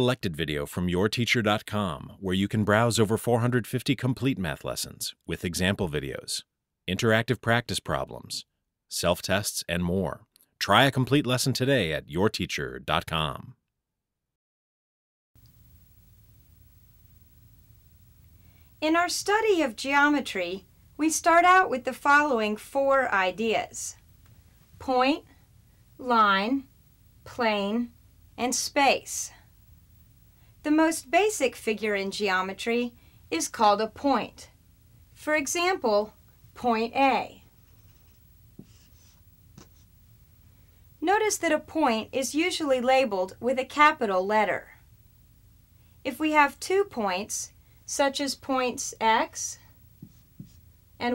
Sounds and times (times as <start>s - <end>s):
Speech: 0.0s - 13.6s, 18.8s - 24.0s, 24.8s - 25.3s, 26.0s - 26.7s, 27.3s - 29.4s, 30.7s - 34.5s, 35.2s - 37.5s, 41.0s - 44.8s, 46.1s - 49.7s
Inside, small room: 15.4s - 51.1s
Writing: 37.0s - 40.0s, 49.9s - 50.7s.